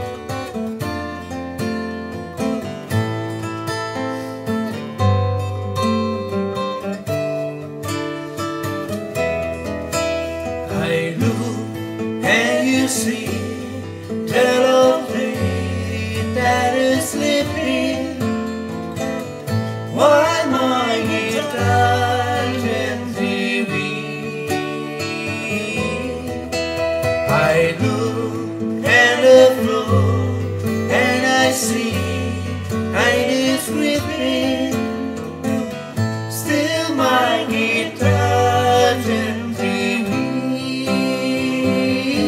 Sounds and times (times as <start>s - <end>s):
Acoustic guitar: 0.0s - 42.2s.